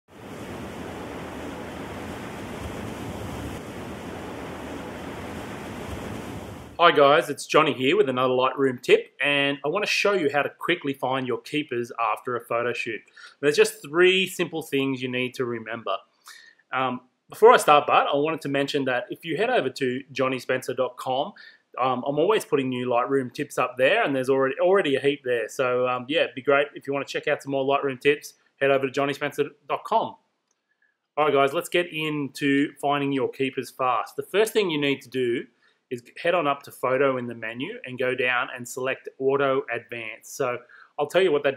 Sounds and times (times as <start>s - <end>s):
Pink noise: 0.1s - 7.3s.